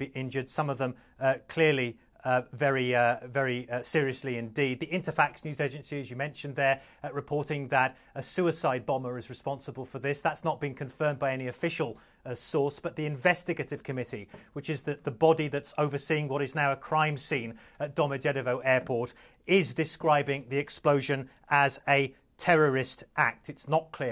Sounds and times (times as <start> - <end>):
Speech: 0.0 - 24.1.